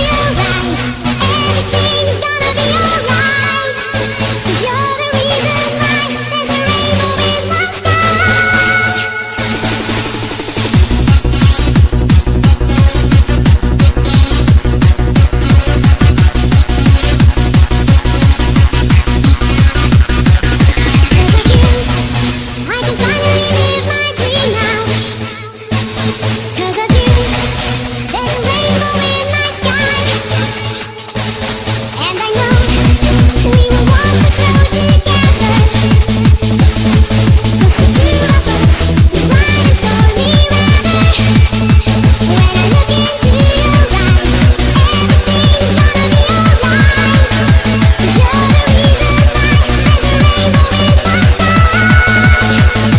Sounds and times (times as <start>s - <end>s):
Techno: 0.0s - 52.9s.